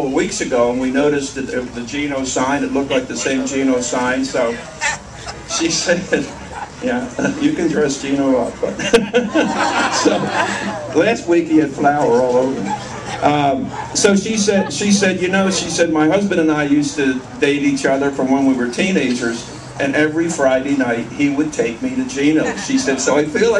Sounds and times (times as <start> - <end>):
Speech: 0.0 - 4.7, 5.5 - 8.8, 11.0 - 23.5.